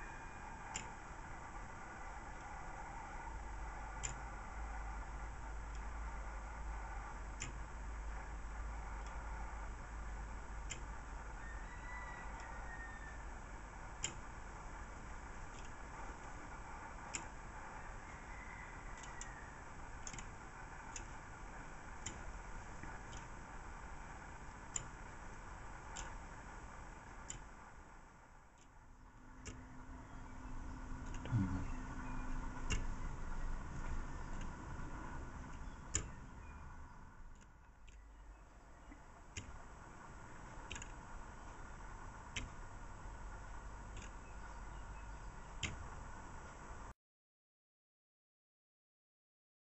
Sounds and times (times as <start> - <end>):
Tick-tock: 0.0 - 46.8.